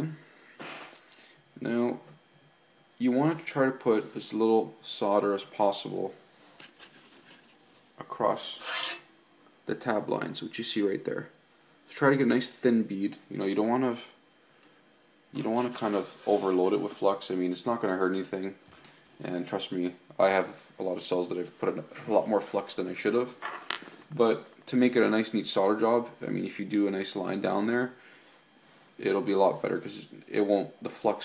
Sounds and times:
Speech: 0:00.0 - 0:00.2, 0:01.6 - 0:02.1, 0:03.0 - 0:06.2, 0:08.0 - 0:08.7, 0:09.7 - 0:14.2, 0:15.3 - 0:18.6, 0:19.2 - 0:23.4, 0:24.1 - 0:28.0, 0:29.0 - 0:31.2
Inside, small room: 0:00.0 - 0:31.2.

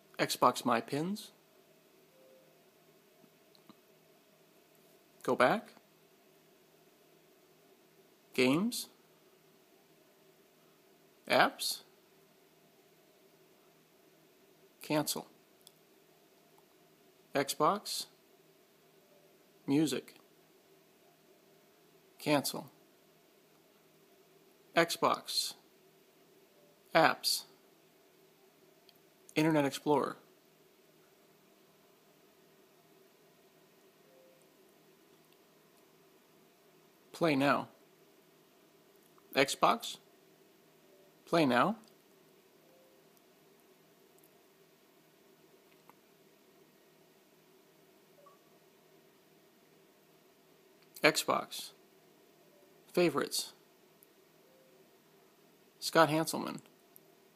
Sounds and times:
Speech: 0:00.2 - 0:01.4, 0:05.2 - 0:05.8, 0:08.4 - 0:09.0, 0:11.3 - 0:11.9, 0:14.8 - 0:15.4, 0:17.3 - 0:18.2, 0:19.7 - 0:20.2, 0:22.2 - 0:22.8, 0:24.8 - 0:25.6, 0:26.9 - 0:27.6, 0:29.4 - 0:30.2, 0:37.2 - 0:37.8, 0:39.4 - 0:40.0, 0:41.3 - 0:41.8, 0:51.0 - 0:51.8, 0:52.9 - 0:53.6, 0:55.8 - 0:56.7.

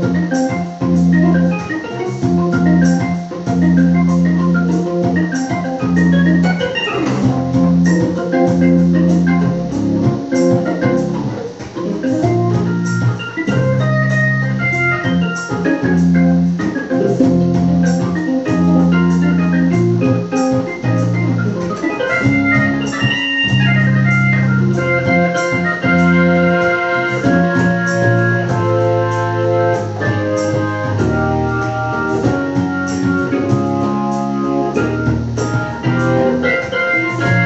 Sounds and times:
Electronic organ: 0:00.0 - 0:37.4.

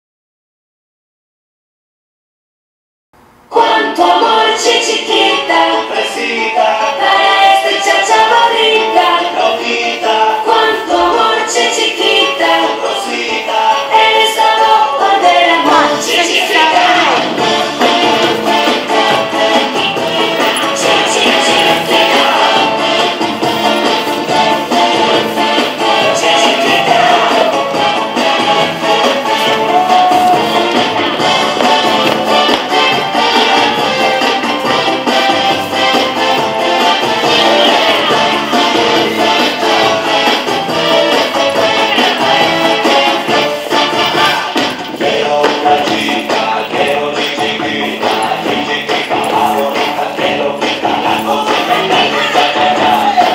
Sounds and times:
Music: 0:03.5 - 0:53.3.

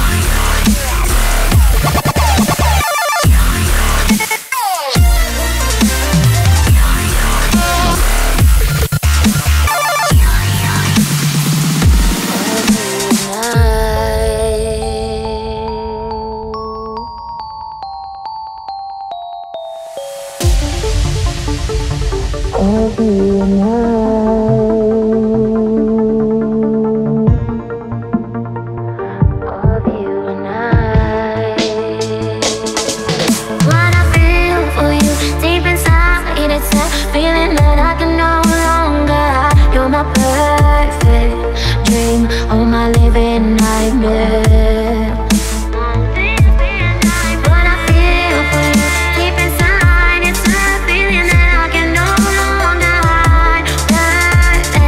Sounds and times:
Dubstep: 0:00.0 - 0:14.5, 0:31.5 - 0:54.8.

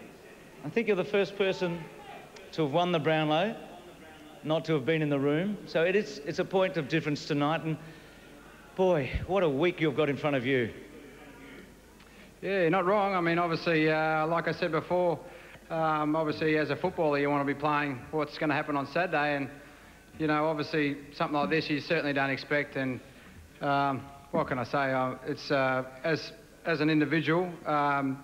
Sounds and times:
Male speech, man speaking: 0:00.0 - 0:07.8, 0:08.8 - 0:11.7, 0:12.4 - 0:19.6, 0:20.2 - 0:23.0, 0:23.6 - 0:28.2
Narration, monologue: 0:00.0 - 0:28.2.

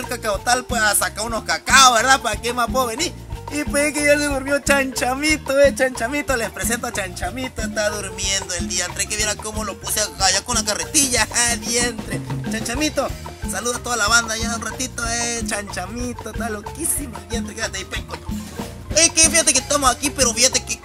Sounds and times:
Speech: 0:00.0 - 0:18.3, 0:19.0 - 0:20.8
Music: 0:00.0 - 0:20.8.

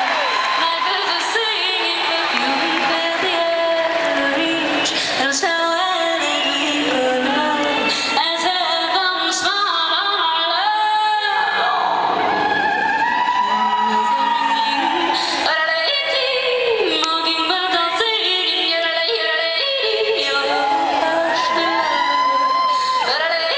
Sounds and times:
Music: 0:00.0 - 0:23.5
Singing: 0:00.0 - 0:23.5.

